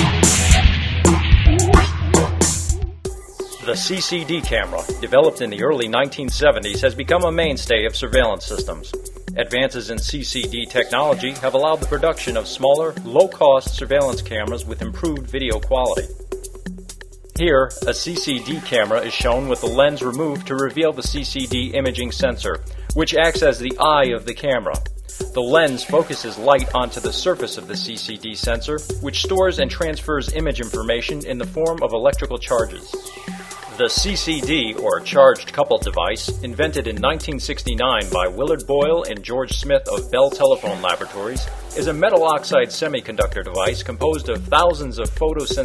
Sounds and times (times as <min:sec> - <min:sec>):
Music: 0:00.0 - 0:45.6
Speech: 0:03.6 - 0:16.1, 0:17.4 - 0:24.8, 0:25.4 - 0:33.0, 0:33.7 - 0:45.6.